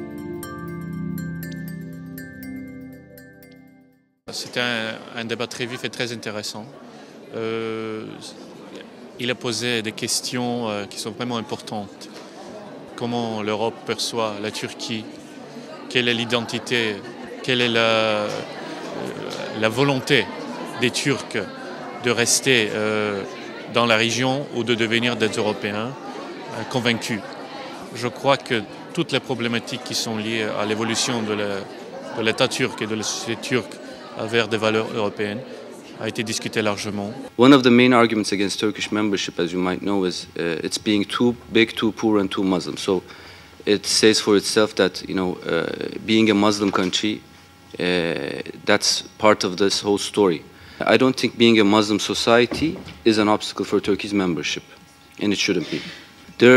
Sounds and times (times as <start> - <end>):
Speech: 4.3 - 47.2, 47.8 - 56.5.